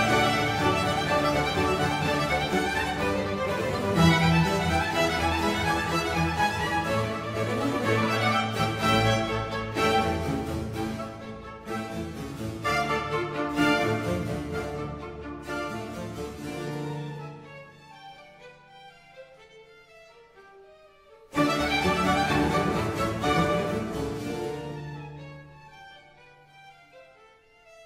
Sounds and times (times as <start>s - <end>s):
Violin, fiddle: 0.0s - 27.8s.